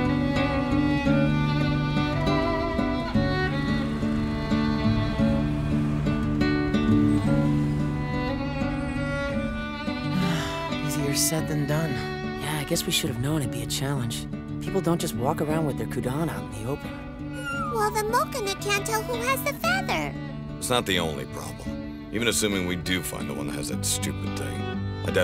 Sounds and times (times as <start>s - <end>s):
Music: 0.0s - 25.2s
Outside, urban or manmade: 0.0s - 25.2s
Speech: 10.9s - 25.2s.